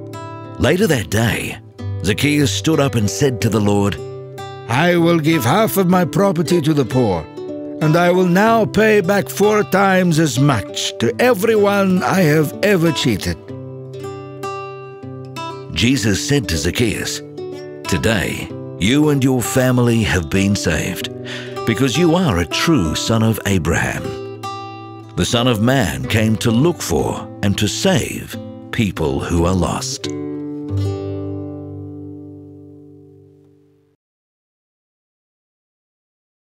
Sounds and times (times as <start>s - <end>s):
Music: 0.0s - 34.0s
Speech: 0.6s - 4.0s, 4.7s - 13.4s, 15.7s - 17.2s, 17.9s - 21.1s, 21.7s - 24.2s, 25.2s - 30.1s.